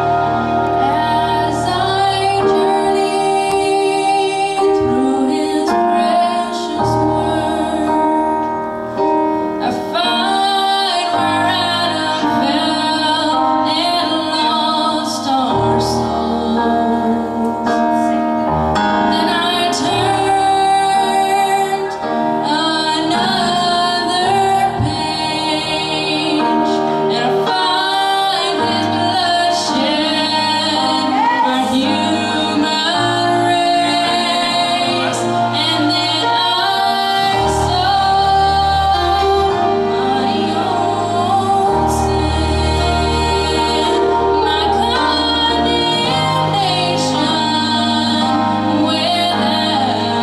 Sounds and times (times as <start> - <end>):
Female singing: 0.0 - 8.4, 9.6 - 18.2, 19.1 - 50.2
Music: 0.0 - 50.2.